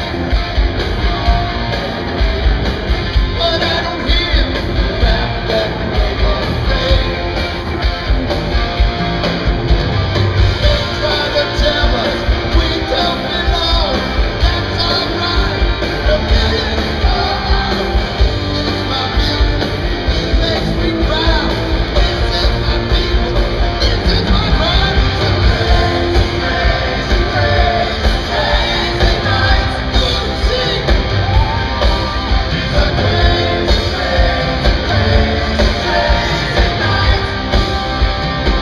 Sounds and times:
Music: 0:00.0 - 0:38.6.

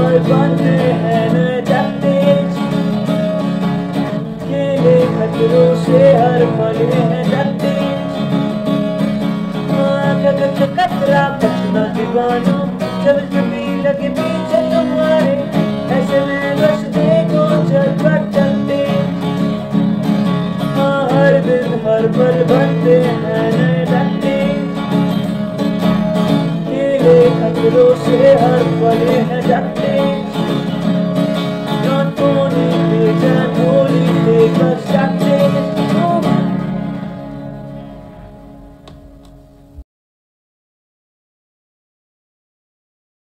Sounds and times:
Music: 0:00.0 - 0:39.8.

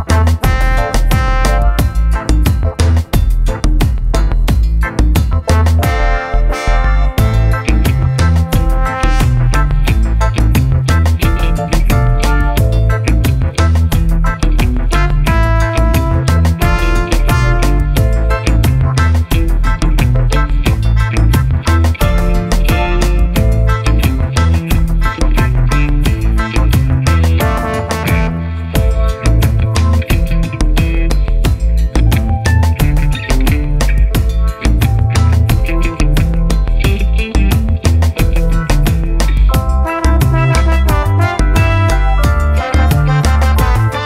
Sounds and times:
Music: 0:00.0 - 0:44.0.

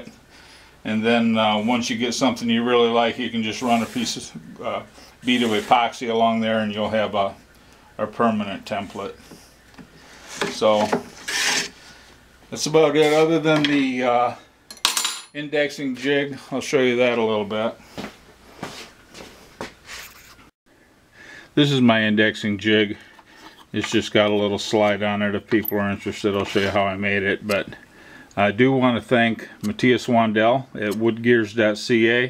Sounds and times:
Speech: 0:00.8 - 0:07.4, 0:08.0 - 0:09.2, 0:10.4 - 0:11.0, 0:12.5 - 0:14.5, 0:15.4 - 0:17.8, 0:21.6 - 0:23.1, 0:23.7 - 0:27.8, 0:28.4 - 0:32.3.

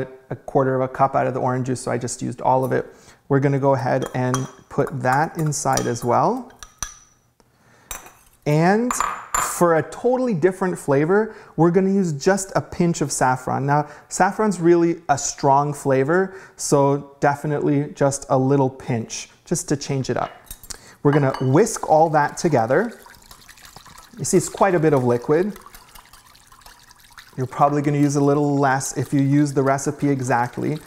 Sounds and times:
Speech: 0:00.0 - 0:06.5, 0:08.5 - 0:20.4, 0:21.0 - 0:23.0, 0:24.2 - 0:25.6, 0:27.4 - 0:30.8.

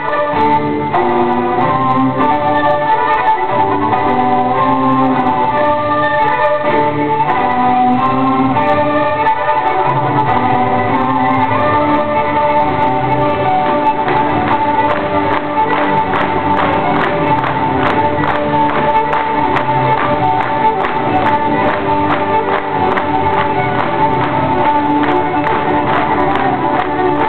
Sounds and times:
Music: 0:00.0 - 0:27.2.

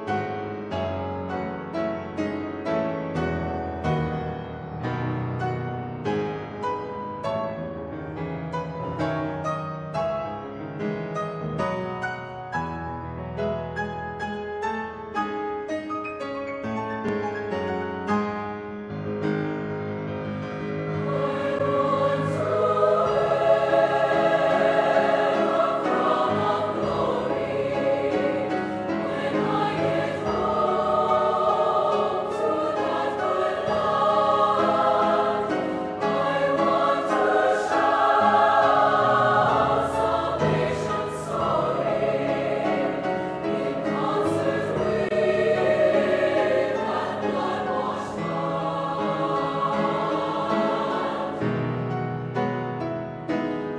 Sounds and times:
Piano: 0:00.0 - 0:53.7
Choir: 0:20.8 - 0:52.0.

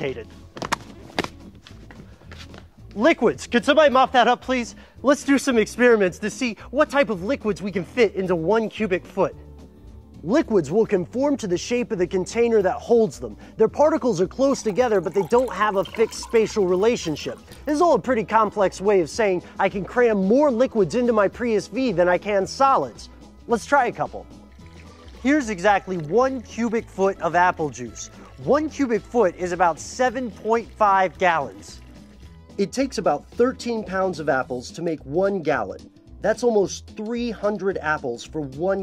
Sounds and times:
Speech: 0:00.0 - 0:00.3, 0:03.0 - 0:09.4, 0:10.2 - 0:24.3, 0:25.2 - 0:31.8, 0:32.6 - 0:38.8
Music: 0:00.0 - 0:38.8.

